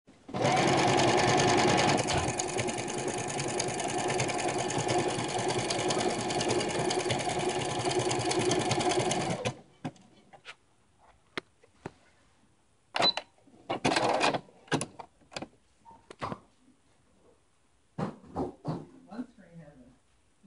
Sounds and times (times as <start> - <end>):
Inside, small room: 0.1 - 20.4
Sewing machine: 0.3 - 9.6, 13.8 - 14.4.